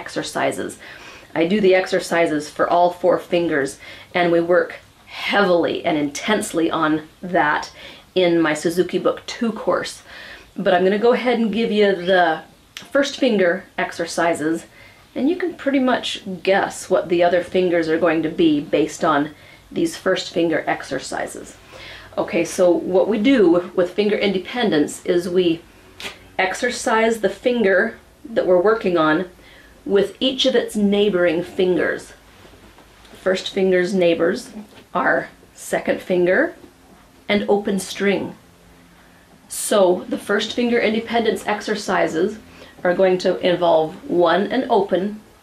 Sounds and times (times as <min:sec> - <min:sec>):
Speech: 0:00.0 - 0:25.7, 0:26.4 - 0:32.2, 0:33.1 - 0:36.7, 0:37.3 - 0:38.4, 0:39.5 - 0:45.3.